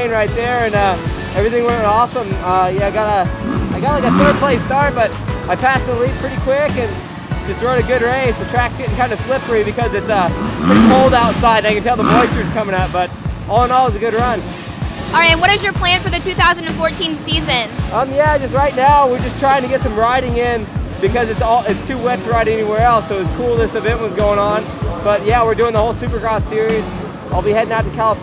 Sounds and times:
Motorcycle: 0:00.0 - 0:27.6
Music: 0:00.0 - 0:28.2.

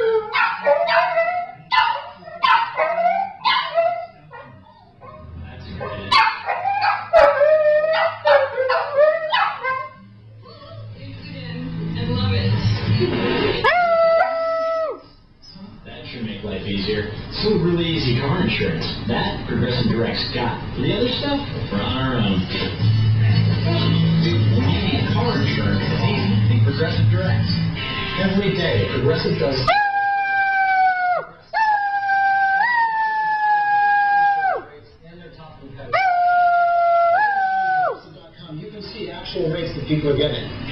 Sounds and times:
Music: 0:09.7 - 0:13.6, 0:21.8 - 0:29.6
Speech: 0:15.5 - 0:27.6, 0:28.2 - 0:29.7, 0:34.6 - 0:36.0.

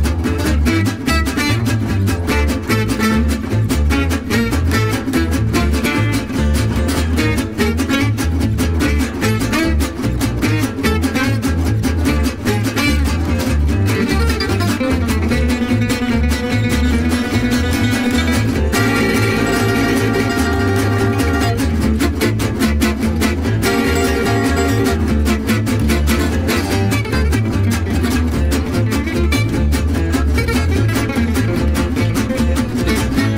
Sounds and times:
Music: 0:00.0 - 0:33.3.

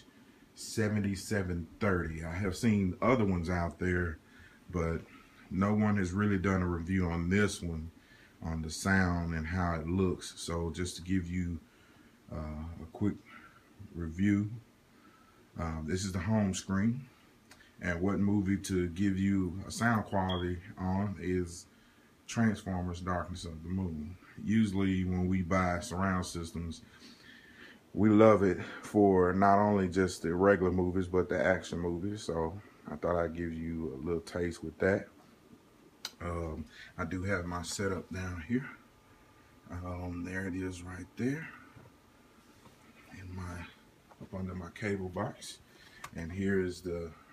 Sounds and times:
Speech: 0:00.0 - 0:11.6, 0:12.3 - 0:14.7, 0:15.6 - 0:17.2, 0:17.8 - 0:21.7, 0:22.3 - 0:26.9, 0:28.0 - 0:35.2, 0:36.1 - 0:38.8, 0:39.7 - 0:41.7, 0:43.1 - 0:47.3.

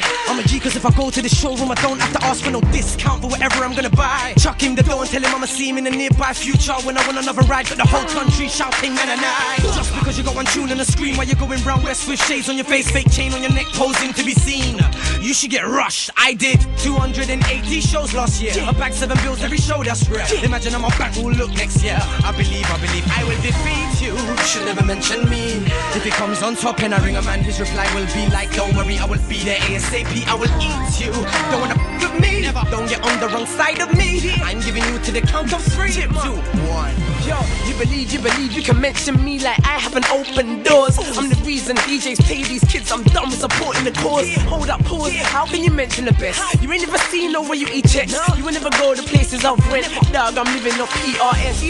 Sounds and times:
Music: 0:00.0 - 0:51.6.

